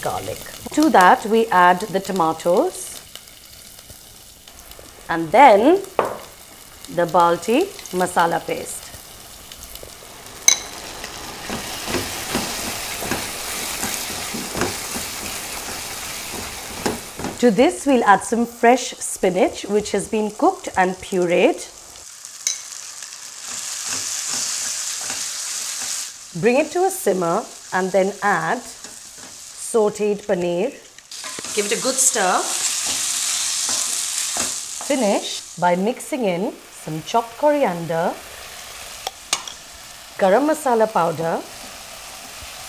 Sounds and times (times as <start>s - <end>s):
Frying (food): 0.0s - 42.6s.